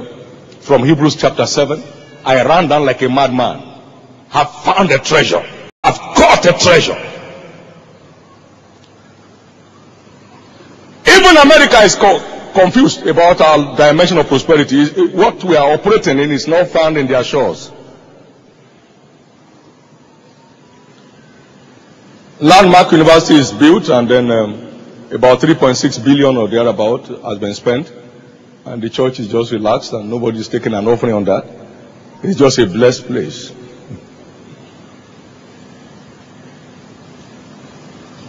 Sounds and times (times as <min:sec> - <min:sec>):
Speech: 0:00.6 - 0:03.7, 0:04.3 - 0:07.4, 0:11.0 - 0:17.8, 0:22.4 - 0:27.9, 0:28.7 - 0:31.5, 0:32.2 - 0:33.6.